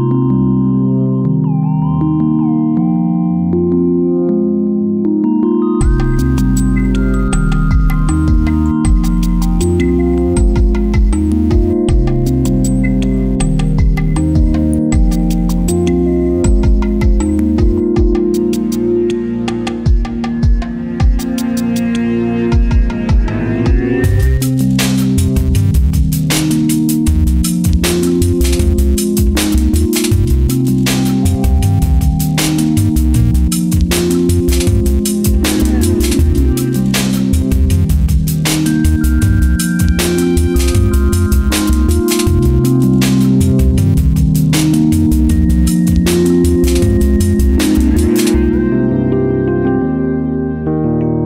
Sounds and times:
Music: 0:00.0 - 0:51.2.

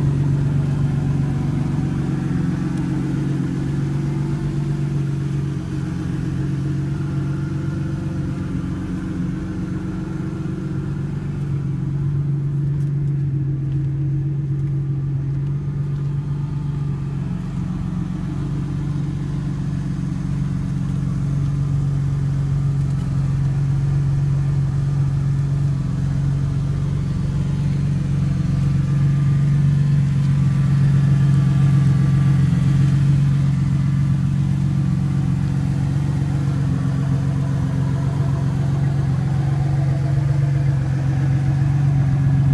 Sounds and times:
Car: 0:00.0 - 0:42.5.

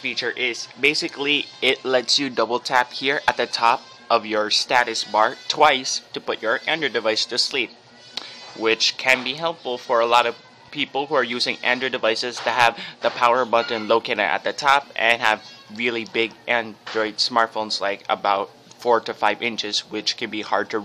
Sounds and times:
Speech: 0:00.0 - 0:07.7, 0:08.6 - 0:20.8.

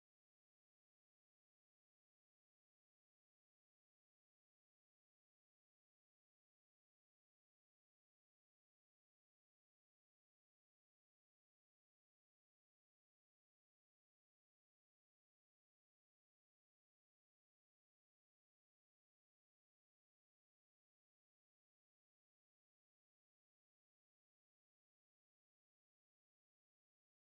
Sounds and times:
Music: 0:00.0 - 0:27.2.

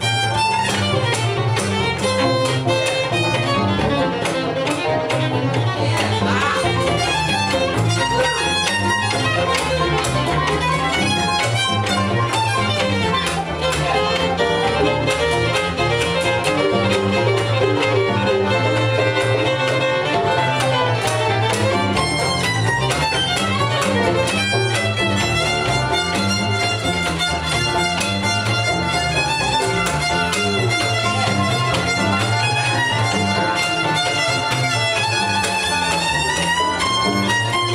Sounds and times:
Violin, fiddle: 0:00.0 - 0:37.7.

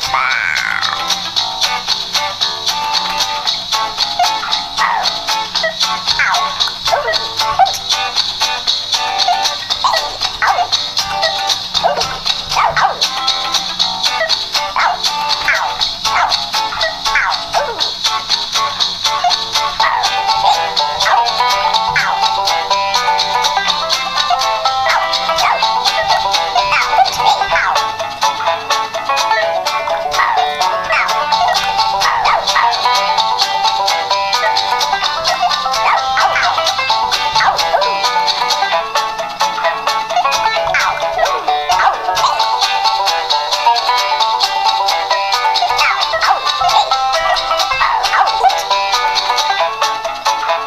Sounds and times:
Music: 0:00.0 - 0:50.6.

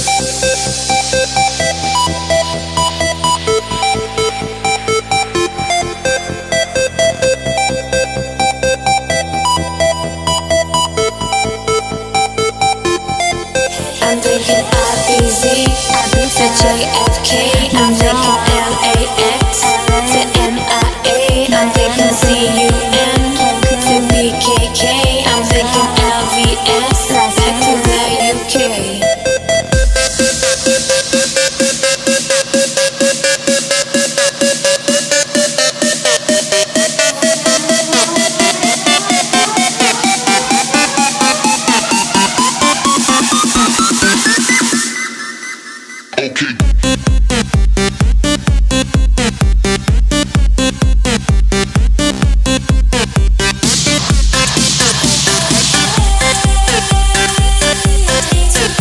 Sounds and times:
Electronic dance music: 0:00.0 - 0:58.8
Singing: 0:13.6 - 0:29.4, 0:36.7 - 0:43.9, 0:54.5 - 0:58.8.

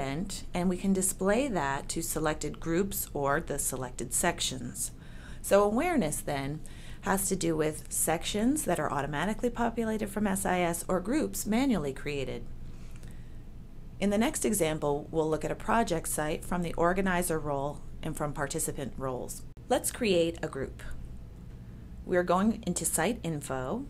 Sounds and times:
Speech: 0:00.0 - 0:12.5, 0:14.0 - 0:21.0, 0:22.1 - 0:23.9.

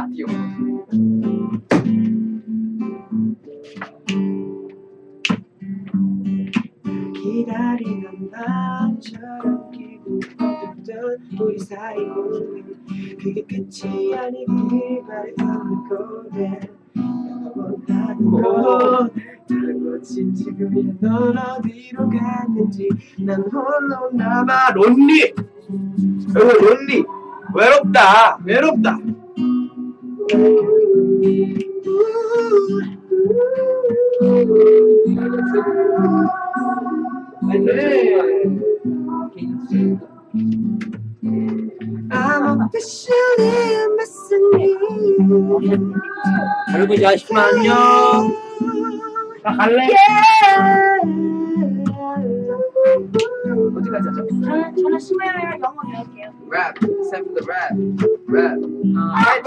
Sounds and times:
Speech: 0:00.0 - 0:00.4, 0:18.2 - 0:19.2, 0:24.4 - 0:25.4, 0:26.3 - 0:29.0, 0:37.4 - 0:38.5, 0:45.5 - 0:48.4, 0:49.5 - 0:50.4, 0:53.8 - 0:59.4
Music: 0:00.0 - 0:59.4.

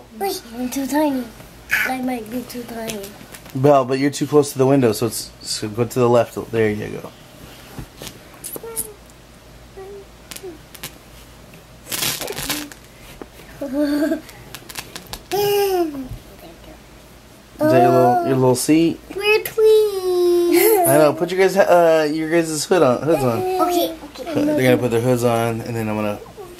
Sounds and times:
Inside, small room: 0:00.0 - 0:26.5
Child speech, kid speaking: 0:00.1 - 0:03.2, 0:08.5 - 0:09.0, 0:09.8 - 0:10.1, 0:15.8 - 0:16.8, 0:17.6 - 0:18.5, 0:19.1 - 0:21.2, 0:23.0 - 0:24.9, 0:26.2 - 0:26.5.

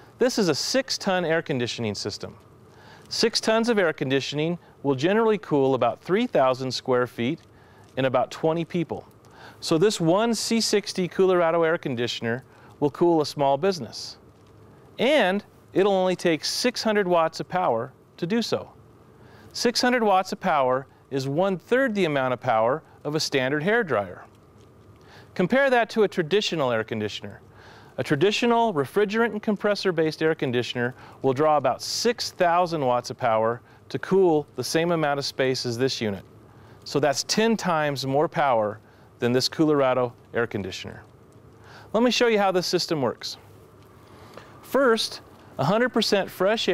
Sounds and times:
Speech: 0:00.2 - 0:02.4, 0:03.1 - 0:14.2, 0:15.0 - 0:18.8, 0:19.5 - 0:24.3, 0:25.4 - 0:27.4, 0:28.0 - 0:36.2, 0:36.9 - 0:41.1, 0:41.9 - 0:43.4, 0:44.7 - 0:46.7.

